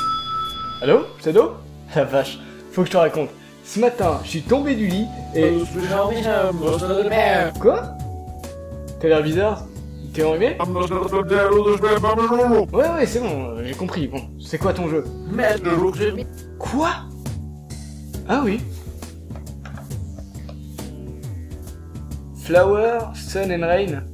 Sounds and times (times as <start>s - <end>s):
Music: 0.0s - 24.1s
Speech: 0.8s - 7.9s, 9.0s - 17.1s, 18.3s - 18.7s, 22.4s - 24.1s.